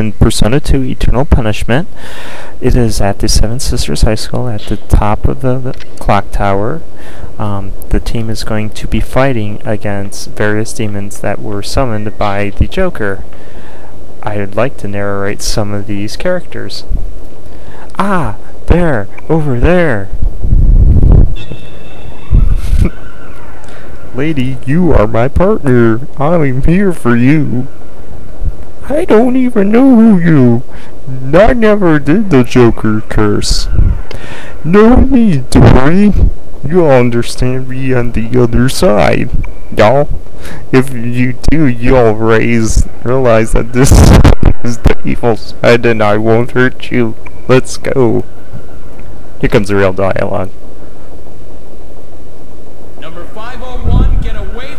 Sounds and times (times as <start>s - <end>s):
Speech: 0.0s - 1.9s, 2.6s - 6.8s, 7.4s - 13.2s, 14.2s - 16.9s, 17.9s - 20.2s, 24.2s - 27.7s, 28.8s - 33.7s, 34.6s - 48.3s, 49.4s - 50.5s, 53.0s - 54.7s.